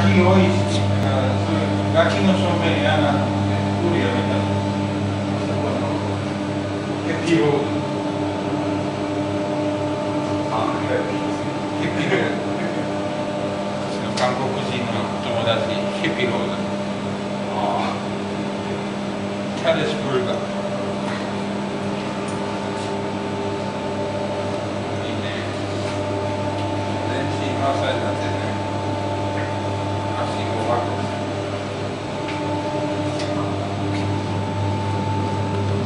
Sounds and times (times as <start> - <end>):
Speech: 0.0 - 4.6, 5.4 - 6.1, 7.0 - 7.8, 10.4 - 13.0, 13.9 - 16.8, 17.4 - 18.2, 19.6 - 20.5, 25.0 - 25.6, 27.1 - 28.7, 29.3 - 31.2.